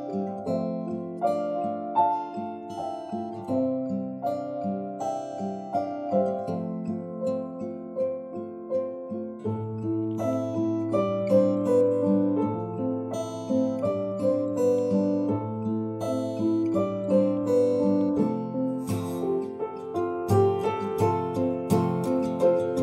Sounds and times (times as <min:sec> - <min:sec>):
Acoustic guitar: 0:00.0 - 0:22.8.